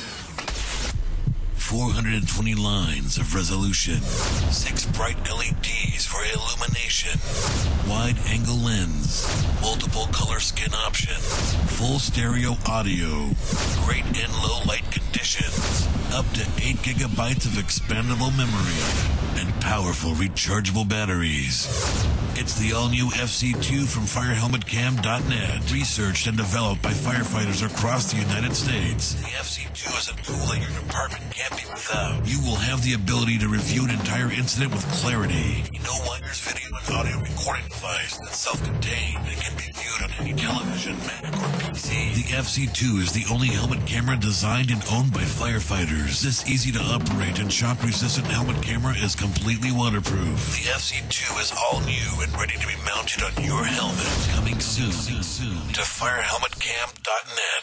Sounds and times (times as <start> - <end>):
Music: 0.0 - 57.0
Speech: 1.6 - 57.6.